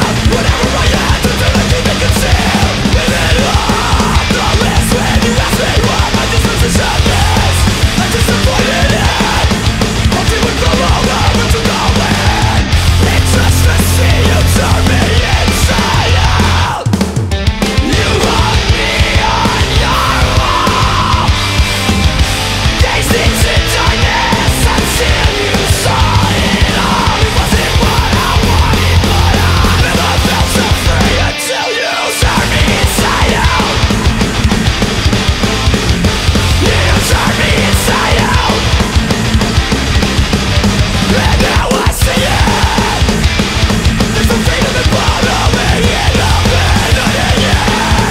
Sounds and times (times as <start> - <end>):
Music: 0.0 - 48.1.